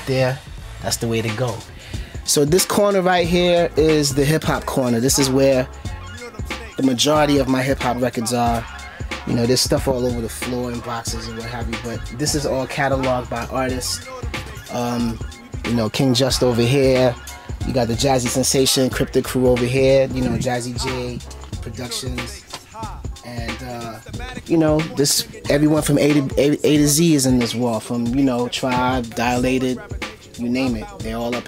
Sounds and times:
Hip hop music: 0.0s - 31.4s.

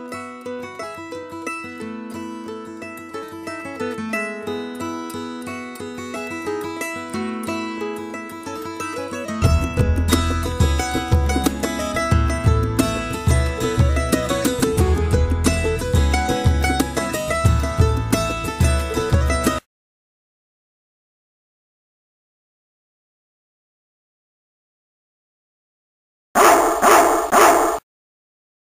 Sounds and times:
Music: 0.0s - 19.6s
Bow-wow: 26.4s - 27.8s
Yip: 26.4s - 27.8s.

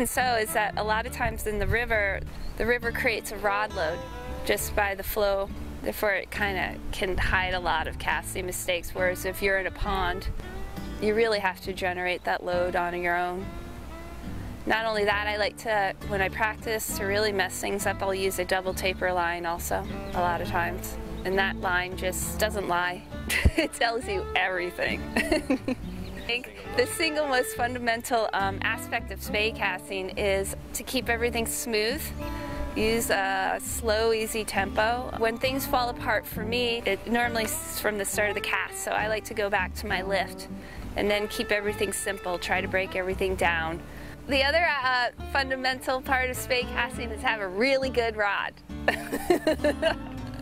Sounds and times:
Speech: 0.0s - 10.3s, 11.0s - 13.4s, 14.7s - 25.3s, 26.3s - 32.2s, 32.8s - 48.6s
Music: 0.0s - 50.4s
Outside, rural or natural: 0.0s - 50.4s.

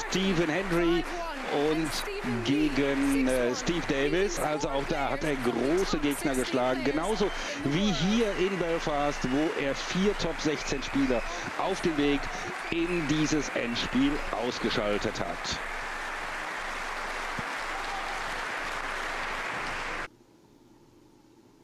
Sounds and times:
Speech: 0.0s - 15.6s.

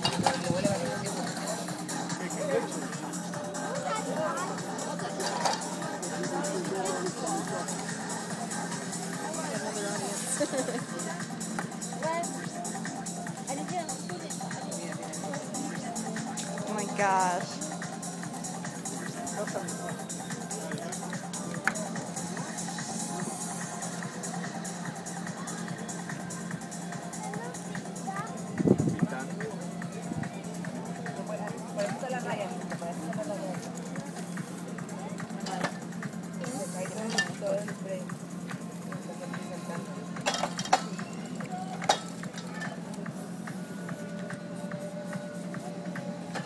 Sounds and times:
Music: 0.0s - 46.4s.

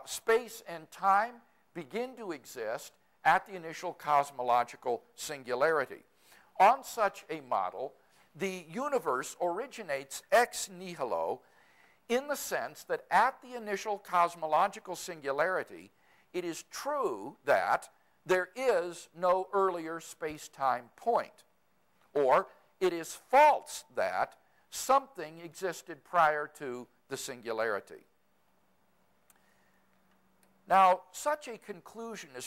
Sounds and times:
Speech: 0.0s - 11.4s, 12.1s - 21.5s, 22.2s - 28.1s, 30.7s - 32.4s.

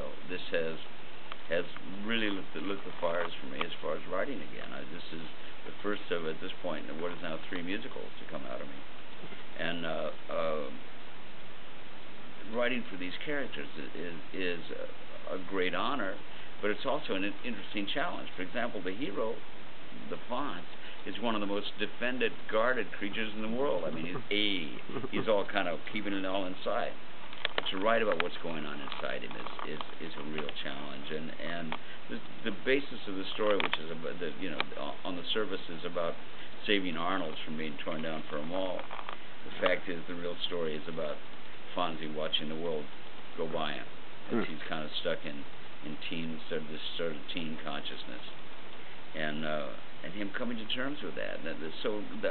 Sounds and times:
Speech: 0.0s - 0.9s, 1.5s - 8.8s, 9.6s - 10.8s, 12.4s - 19.4s, 20.0s - 27.0s, 27.6s - 38.9s, 39.5s - 48.4s, 49.1s - 52.3s.

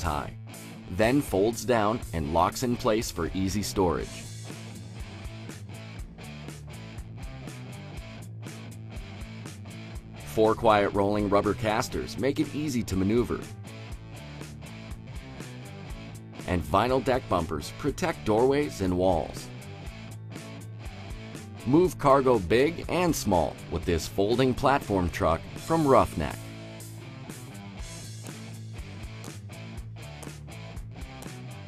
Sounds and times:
Speech: 0.0s - 4.2s, 10.3s - 13.5s, 16.5s - 19.5s, 21.7s - 26.4s
Music: 0.0s - 31.6s.

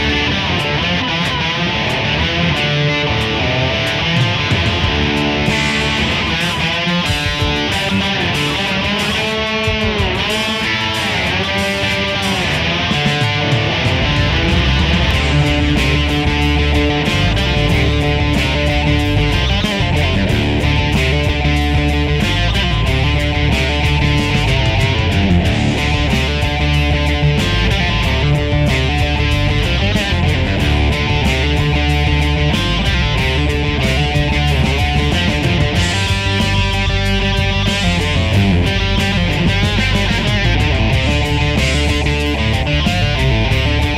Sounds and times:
Electric guitar: 0.0s - 43.9s
Strum: 0.0s - 43.9s.

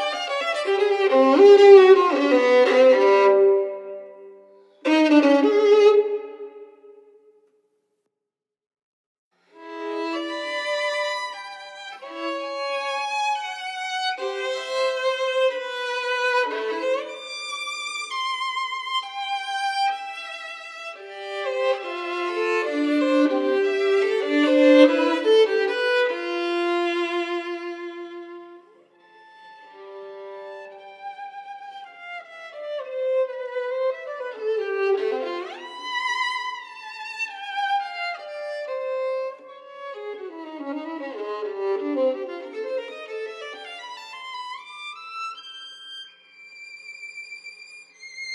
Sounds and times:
Violin, fiddle: 0.0s - 6.8s, 9.5s - 48.3s.

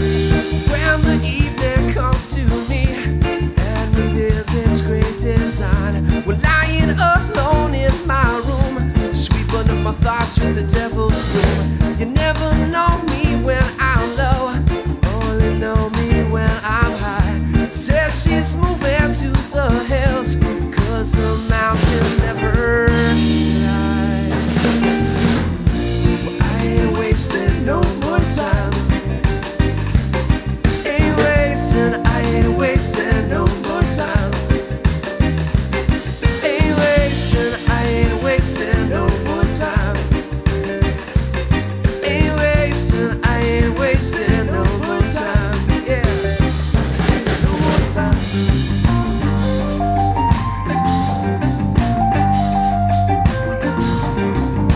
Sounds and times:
Drum: 0.0s - 54.7s
Drum kit: 0.0s - 54.7s
Guitar: 0.0s - 54.7s
Independent music: 0.0s - 54.7s.

